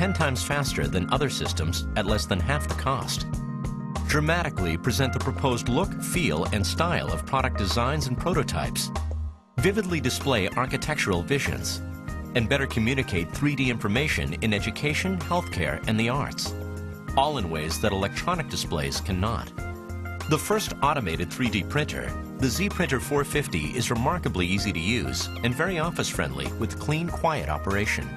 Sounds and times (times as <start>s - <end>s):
Speech: 0.0s - 3.3s, 4.1s - 8.9s, 9.6s - 11.8s, 12.4s - 16.5s, 17.2s - 19.5s, 20.3s - 28.1s
Music: 0.0s - 28.1s.